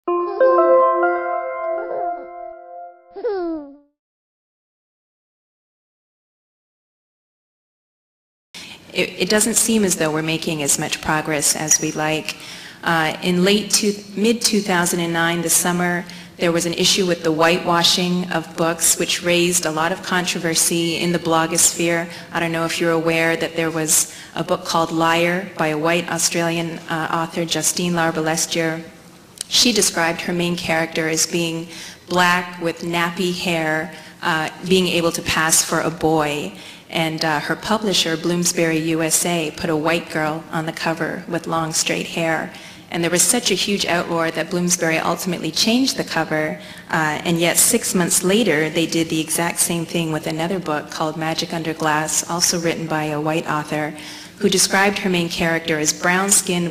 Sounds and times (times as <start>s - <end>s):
Music: 0.0s - 3.2s
Speech: 8.8s - 56.7s.